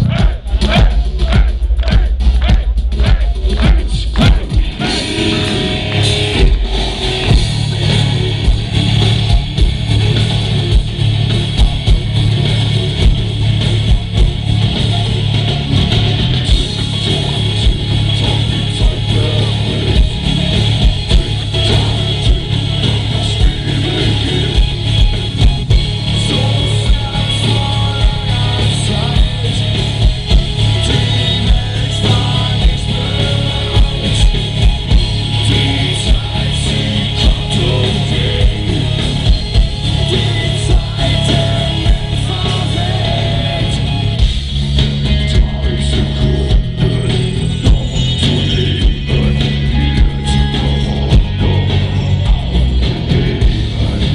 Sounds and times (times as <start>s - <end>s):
Music: 0.0s - 54.1s.